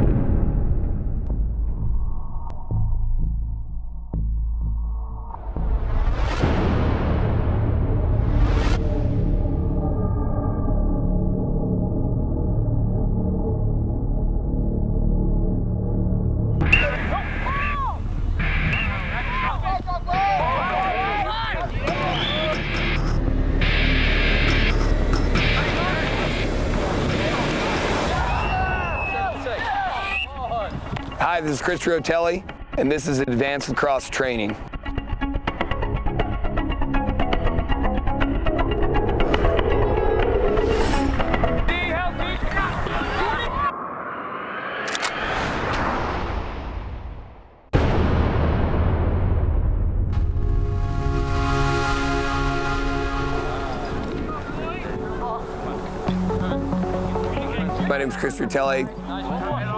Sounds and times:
Music: 0.0s - 27.3s, 28.2s - 43.6s, 50.0s - 59.7s
Speech: 29.1s - 34.6s, 57.4s - 59.7s.

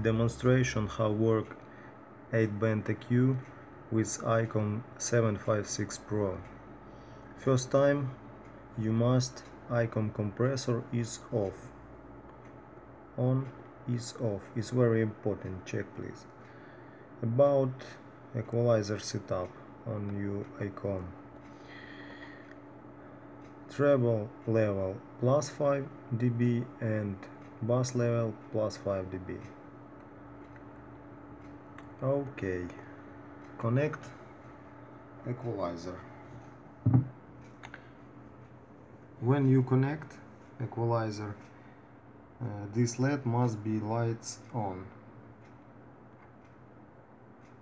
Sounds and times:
Speech: 0.0s - 1.6s, 2.3s - 6.5s, 7.4s - 8.2s, 8.8s - 11.8s, 13.2s - 16.3s, 17.2s - 21.2s, 23.7s - 29.6s, 32.0s - 33.0s, 33.6s - 34.2s, 35.2s - 36.1s, 39.2s - 41.4s, 42.4s - 45.0s.

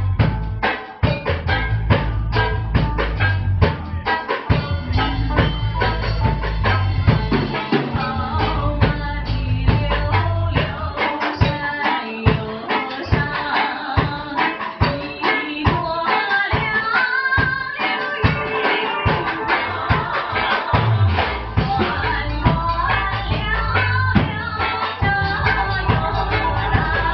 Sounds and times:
Music: 0.0s - 27.1s.

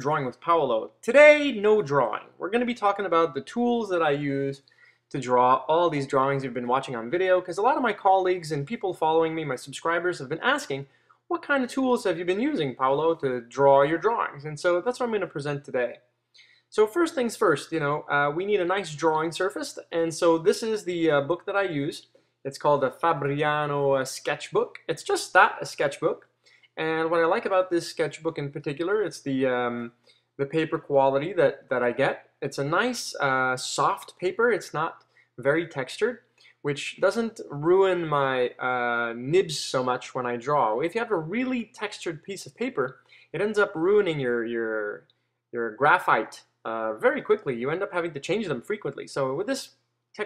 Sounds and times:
Speech: 0.0s - 16.0s, 16.7s - 26.2s, 26.8s - 45.0s, 45.6s - 50.2s.

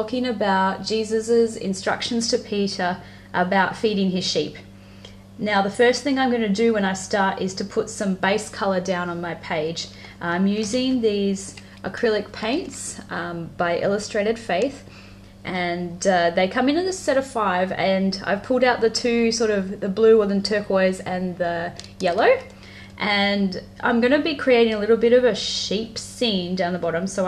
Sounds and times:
Speech: 0.0s - 4.7s, 5.4s - 14.9s, 15.5s - 27.2s.

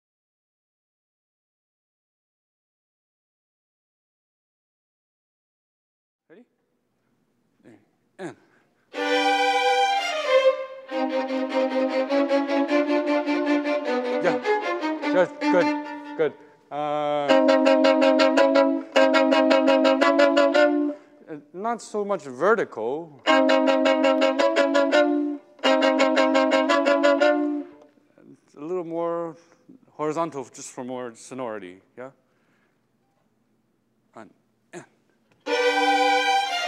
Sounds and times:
Speech: 6.3s - 6.5s, 7.6s - 8.5s, 15.1s - 17.4s, 21.3s - 23.2s, 28.2s - 32.2s, 34.2s - 35.0s
Violin, fiddle: 8.9s - 16.4s, 17.2s - 21.0s, 23.2s - 27.8s, 35.4s - 36.6s.

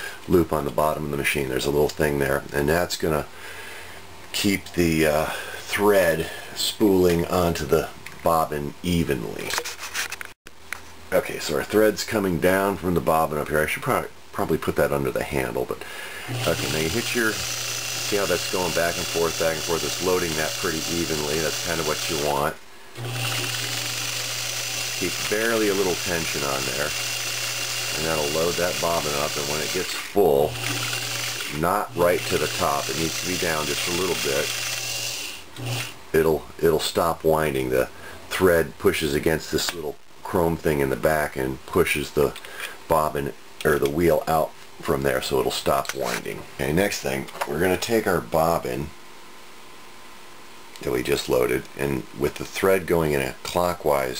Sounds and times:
Speech: 0.3s - 3.3s, 4.3s - 9.6s, 11.1s - 15.8s, 16.4s - 17.4s, 18.0s - 22.6s, 25.0s - 27.0s, 28.0s - 30.6s, 31.5s - 34.5s, 36.2s - 49.0s, 50.8s - 54.1s
Sewing machine: 16.3s - 22.4s, 23.0s - 36.0s.

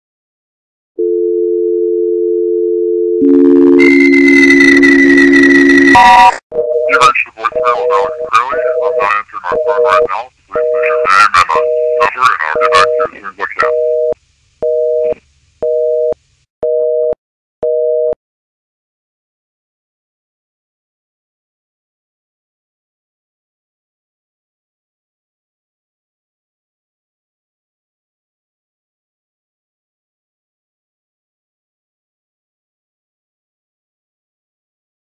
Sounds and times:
Dial tone: 1.0s - 6.9s, 13.6s - 18.2s
Sidetone: 1.0s - 15.2s
Speech: 6.9s - 13.7s
White noise: 6.9s - 14.6s.

